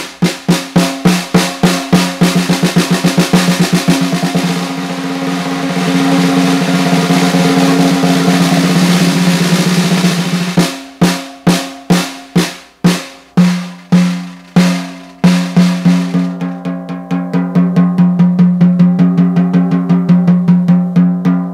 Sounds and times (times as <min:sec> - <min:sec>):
Rimshot: 0:00.0 - 0:16.6
Drum roll: 0:00.0 - 0:21.5.